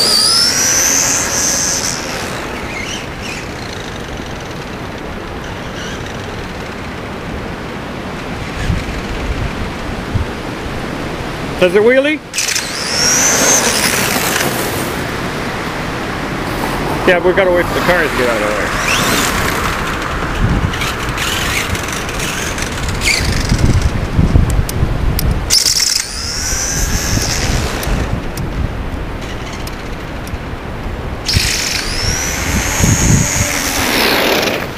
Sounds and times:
Engine: 0:00.0 - 0:10.0, 0:12.3 - 0:34.7
Outside, rural or natural: 0:00.0 - 0:34.7
Vehicle: 0:00.0 - 0:34.7
Speech: 0:11.6 - 0:12.2, 0:17.0 - 0:18.7.

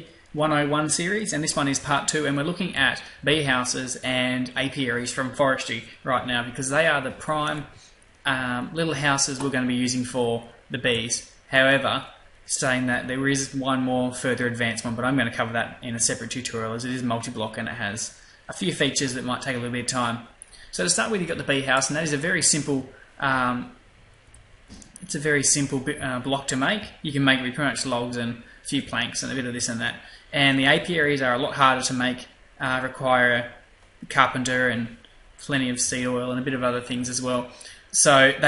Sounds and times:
Speech: 0:00.0 - 0:23.8, 0:24.8 - 0:38.4.

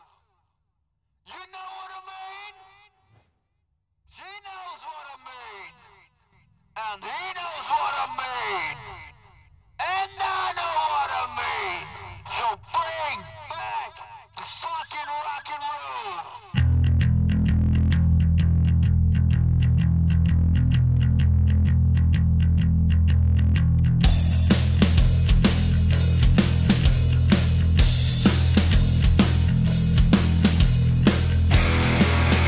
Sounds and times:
Rock and roll: 0:24.0 - 0:32.4.

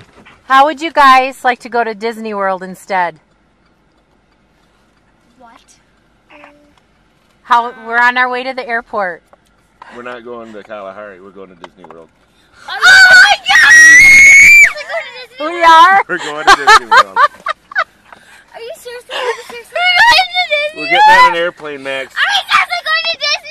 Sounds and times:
Child speech, kid speaking: 0:05.3 - 0:06.8, 0:12.7 - 0:13.7, 0:14.7 - 0:16.0, 0:18.5 - 0:23.5.

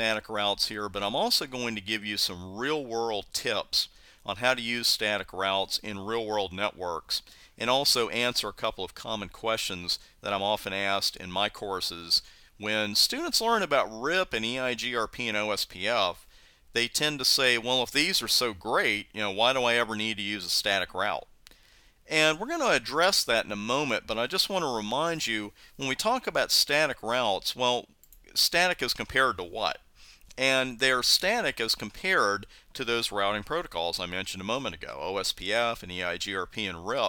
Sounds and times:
Speech: 0:00.0 - 0:21.3, 0:22.1 - 0:37.0.

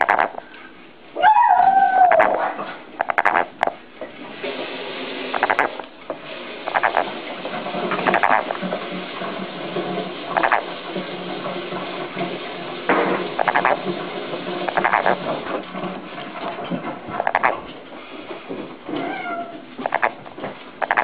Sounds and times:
Frog: 0:00.0 - 0:00.4, 0:02.0 - 0:02.4, 0:03.0 - 0:03.8, 0:05.3 - 0:05.8, 0:06.6 - 0:07.1, 0:08.0 - 0:08.6, 0:10.4 - 0:10.7, 0:13.4 - 0:13.8, 0:14.7 - 0:15.2, 0:17.2 - 0:17.6, 0:19.8 - 0:20.2, 0:20.8 - 0:21.0.

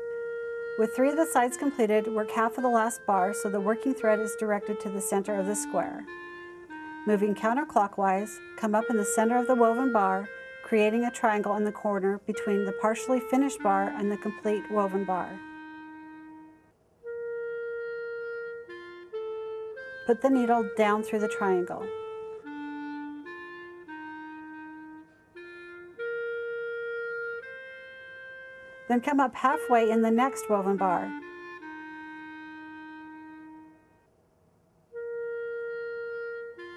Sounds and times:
Music: 0:00.0 - 0:36.7
Speech: 0:00.8 - 0:06.0, 0:07.1 - 0:15.4, 0:20.1 - 0:21.9, 0:28.9 - 0:31.2.

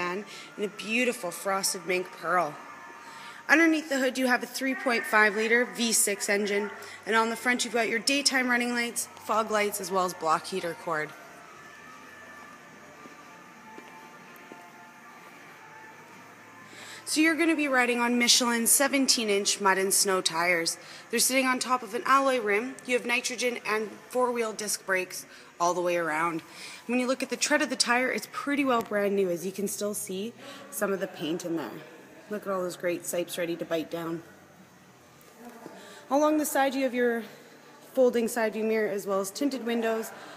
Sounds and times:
Speech: 0:00.0 - 0:02.6, 0:03.5 - 0:11.2, 0:17.1 - 0:34.3, 0:35.4 - 0:40.3.

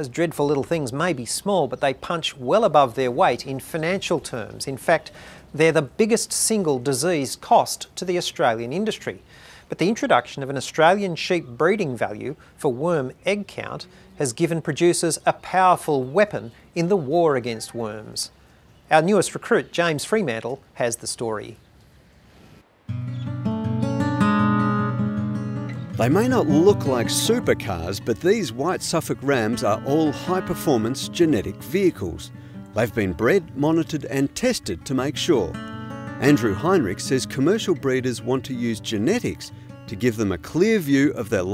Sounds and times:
Speech: 0:00.0 - 0:21.6, 0:26.0 - 0:35.6, 0:36.2 - 0:41.5
Music: 0:22.9 - 0:41.5.

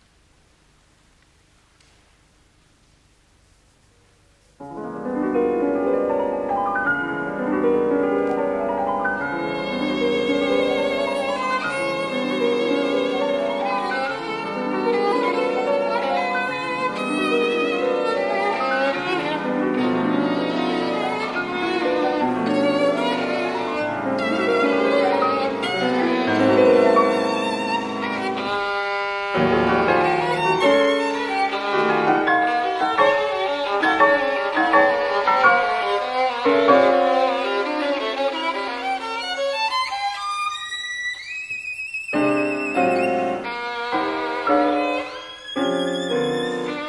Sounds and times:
Violin, fiddle: 0:07.2 - 0:46.8.

